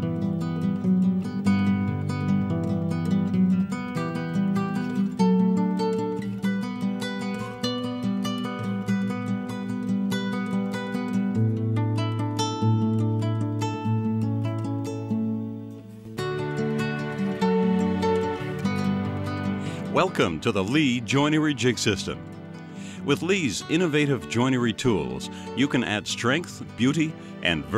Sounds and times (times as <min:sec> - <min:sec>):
Music: 0:00.0 - 0:27.7
Speech: 0:19.9 - 0:22.2, 0:23.0 - 0:27.7.